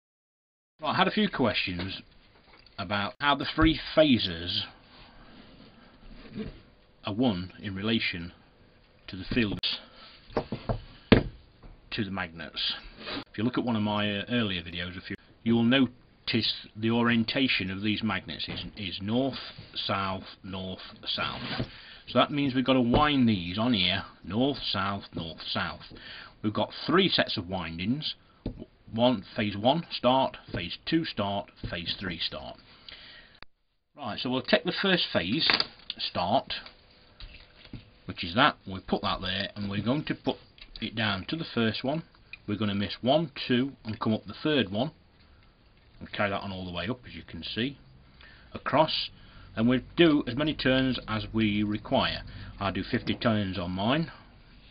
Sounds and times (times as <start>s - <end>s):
Speech: 0.8s - 2.1s, 2.8s - 4.8s, 7.0s - 8.4s, 9.1s - 9.9s, 11.9s - 32.6s, 34.0s - 36.7s, 38.1s - 45.0s, 46.0s - 47.8s, 48.6s - 54.2s.